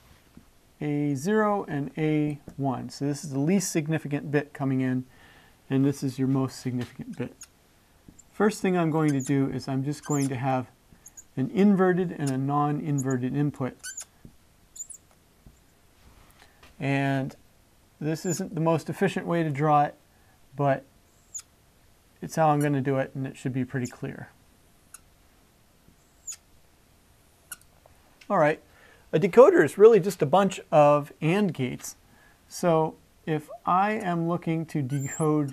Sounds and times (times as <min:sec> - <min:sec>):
Speech: 0:00.8 - 0:05.1, 0:05.7 - 0:07.4, 0:08.4 - 0:10.7, 0:11.4 - 0:13.8, 0:16.8 - 0:17.4, 0:18.0 - 0:20.0, 0:20.6 - 0:20.9, 0:22.2 - 0:24.4, 0:28.3 - 0:35.5.